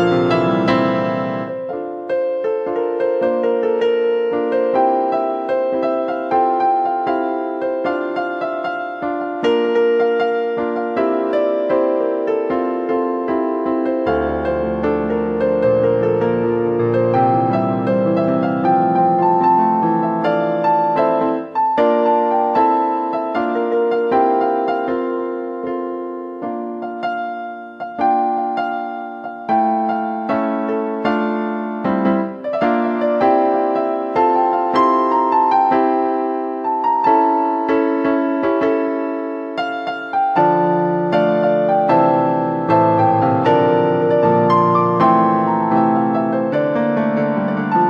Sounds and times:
Tender music: 0.0s - 47.8s.

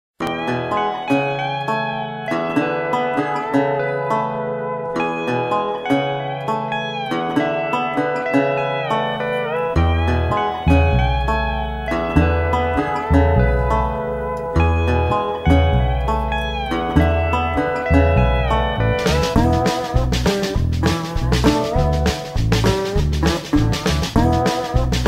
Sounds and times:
Harp: 0.2s - 22.8s
Pizzicato: 0.2s - 25.0s.

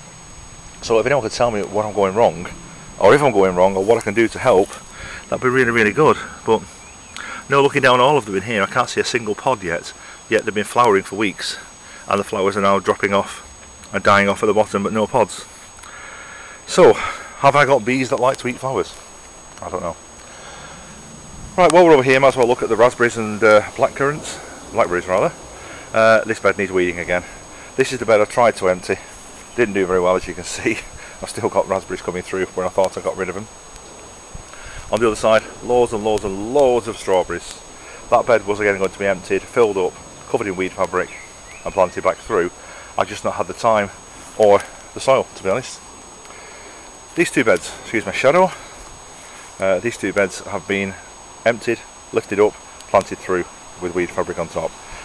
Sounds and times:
Outside, rural or natural: 0.0s - 55.0s
Speech: 0.8s - 6.7s, 7.4s - 15.5s, 16.7s - 19.0s, 19.6s - 20.0s, 21.6s - 33.5s, 34.9s - 45.8s, 47.2s - 48.7s, 49.6s - 54.8s.

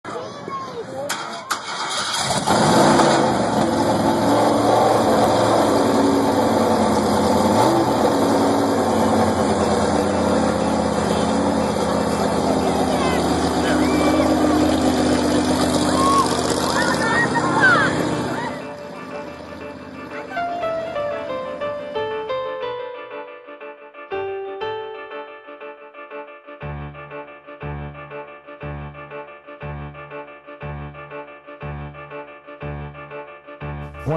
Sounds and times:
Car: 0.8s - 22.1s
Engine: 0.9s - 22.2s.

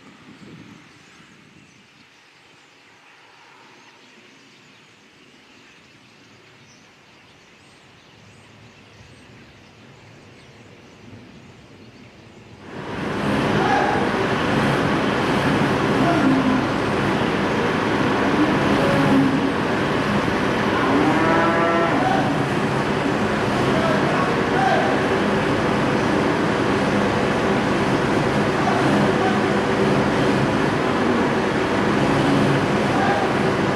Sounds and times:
Speech: 15.9s - 16.8s, 23.6s - 25.1s, 28.5s - 29.8s, 32.9s - 33.6s.

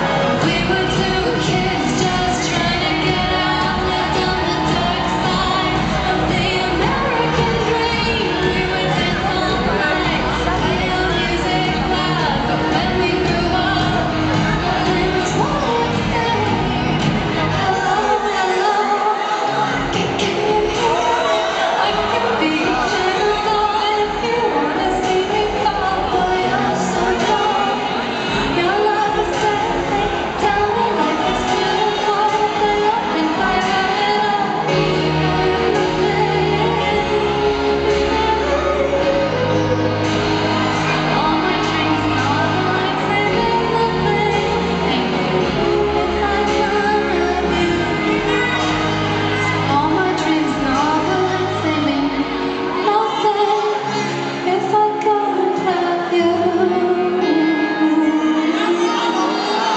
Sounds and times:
Music: 0.0s - 59.7s.

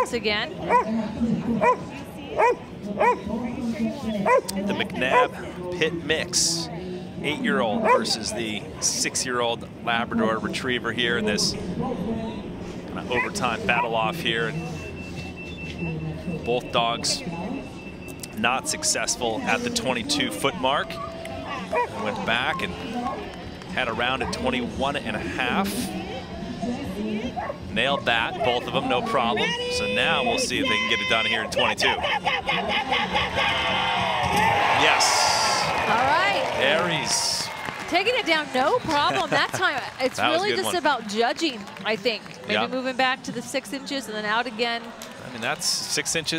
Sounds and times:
Bow-wow: 2.4s - 3.2s, 4.3s - 4.5s, 21.0s - 23.2s.

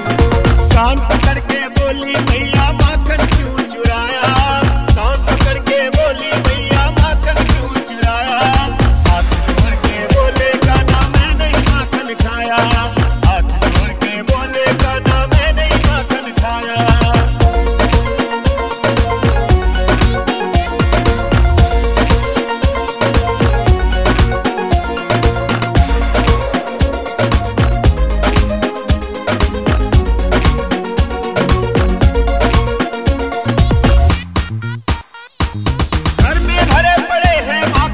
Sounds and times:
Background music: 0.0s - 37.9s.

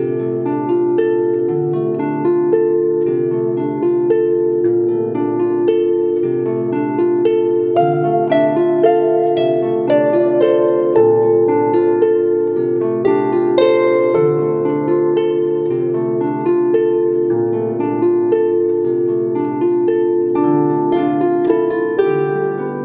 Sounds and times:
Harp: 0.0s - 22.8s.

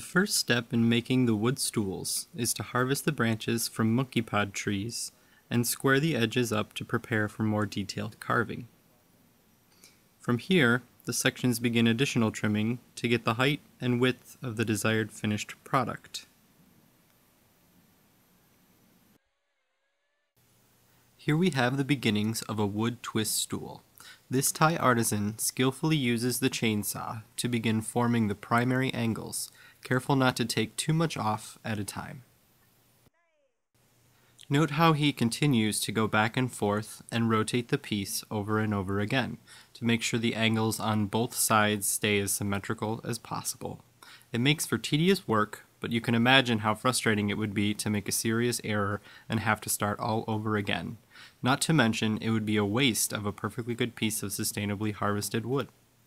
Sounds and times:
Speech: 0.0s - 8.7s, 10.2s - 16.4s, 21.2s - 32.3s, 34.4s - 55.8s.

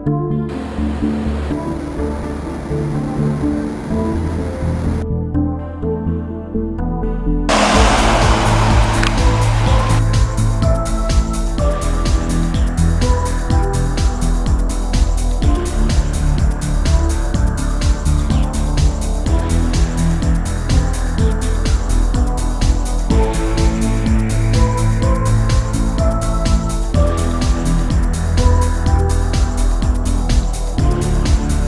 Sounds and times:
Music: 0.0s - 31.6s.

